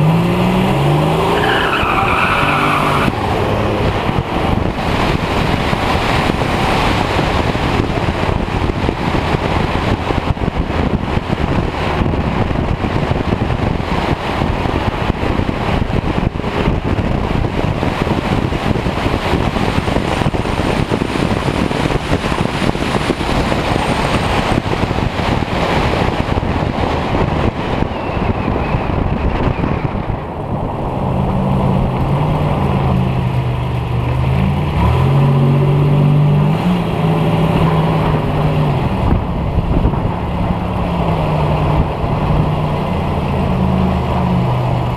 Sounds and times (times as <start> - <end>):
Car: 0.0 - 44.9
Outside, urban or manmade: 0.0 - 44.9.